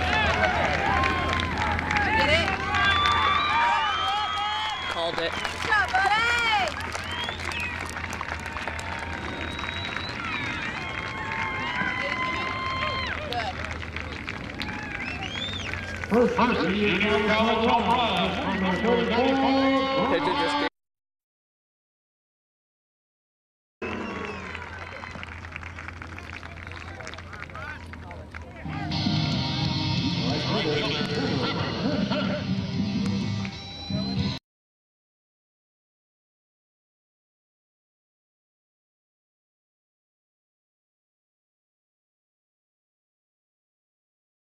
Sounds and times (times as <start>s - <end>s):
Music: 28.7s - 34.4s.